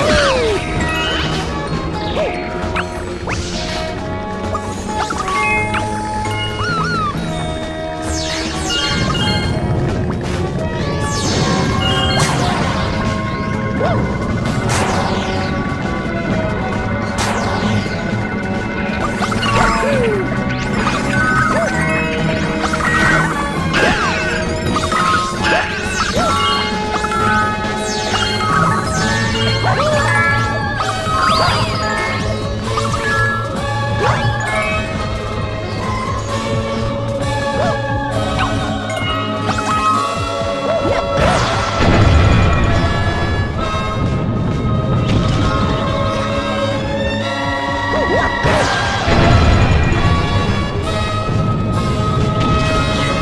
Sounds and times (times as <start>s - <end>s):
Music: 0.0s - 53.2s.